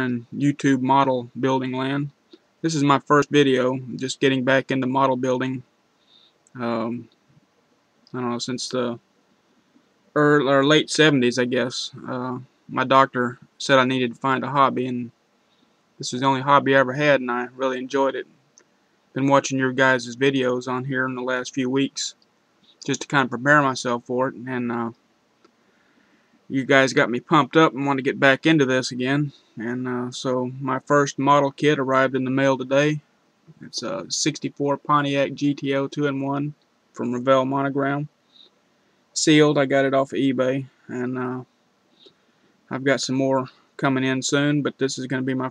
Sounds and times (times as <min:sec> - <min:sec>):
Speech: 0:00.0 - 0:05.7, 0:06.5 - 0:07.1, 0:08.1 - 0:09.0, 0:10.1 - 0:15.2, 0:16.0 - 0:18.3, 0:19.1 - 0:22.2, 0:22.8 - 0:25.0, 0:26.5 - 0:38.1, 0:39.2 - 0:41.5, 0:42.7 - 0:45.5.